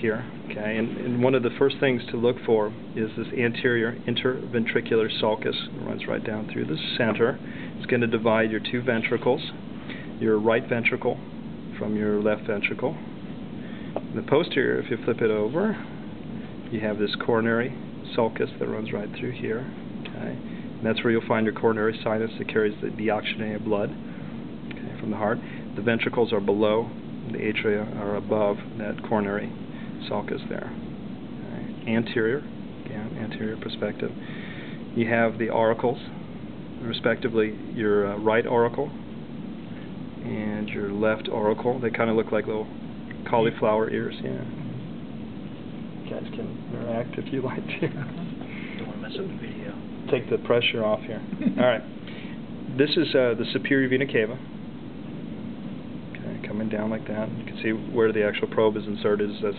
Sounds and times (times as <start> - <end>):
Speech: 0.0 - 9.6, 10.2 - 13.1, 14.0 - 15.9, 16.7 - 24.0, 24.7 - 30.8, 31.4 - 34.2, 35.0 - 36.2, 36.8 - 39.0, 40.2 - 44.8, 46.0 - 48.2, 48.8 - 51.9, 52.7 - 54.5, 56.2 - 59.5.